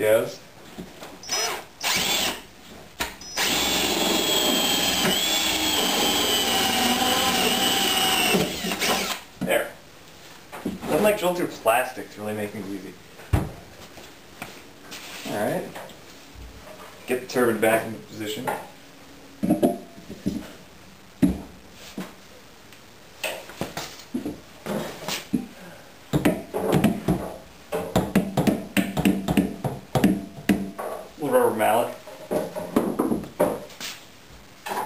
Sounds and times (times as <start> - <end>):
Speech: 0.0 - 0.4, 9.4 - 9.8, 10.8 - 13.0, 15.2 - 15.8, 17.0 - 18.6, 31.2 - 32.0.